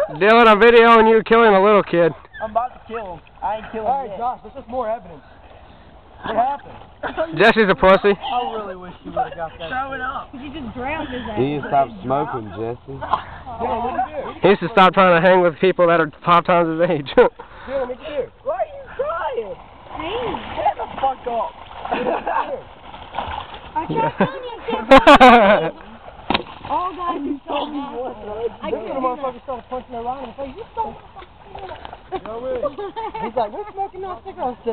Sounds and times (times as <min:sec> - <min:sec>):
Stream: 0:00.0 - 0:34.7.